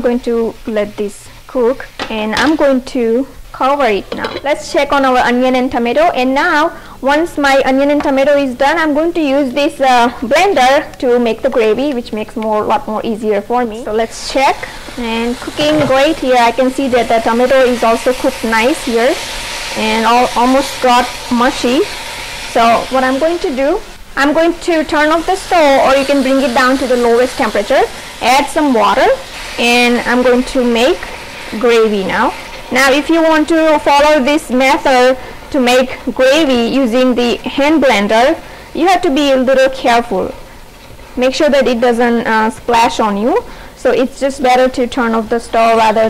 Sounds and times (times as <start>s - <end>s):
Speech: 0.0s - 19.2s, 19.8s - 21.9s, 22.6s - 40.4s, 41.2s - 46.0s.